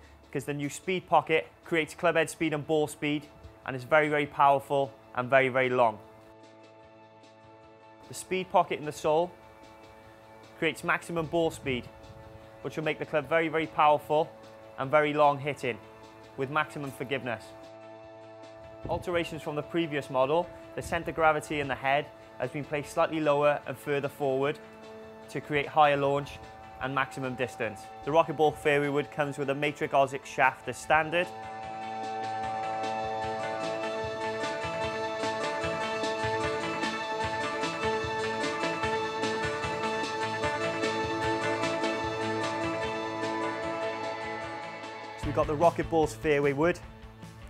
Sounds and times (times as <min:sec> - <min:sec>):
Speech: 0:00.3 - 0:06.0, 0:08.1 - 0:09.4, 0:10.6 - 0:11.9, 0:12.6 - 0:15.8, 0:16.4 - 0:17.5, 0:18.9 - 0:24.6, 0:25.3 - 0:31.3, 0:45.2 - 0:46.8.